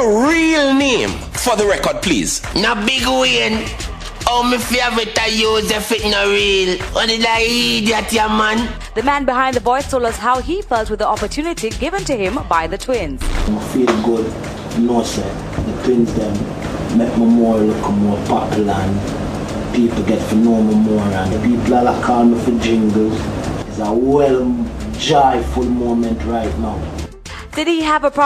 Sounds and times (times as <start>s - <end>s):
Music: 0.0s - 28.2s
Speech: 4.3s - 16.4s, 17.0s - 19.0s, 19.8s - 26.8s.